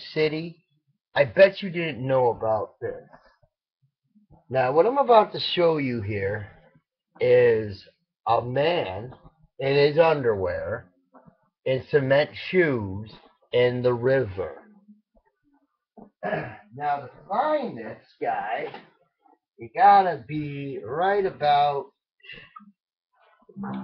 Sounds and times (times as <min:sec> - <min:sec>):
Speech: 0:00.0 - 0:00.5, 0:01.2 - 0:03.1, 0:04.5 - 0:06.5, 0:07.2 - 0:10.8, 0:11.7 - 0:14.6, 0:16.2 - 0:18.8, 0:19.6 - 0:22.5, 0:23.6 - 0:23.8.